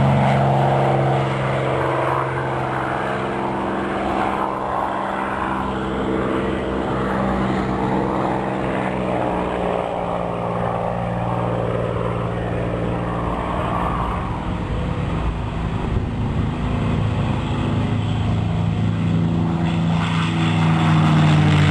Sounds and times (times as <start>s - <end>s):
Aircraft: 0.0s - 21.7s.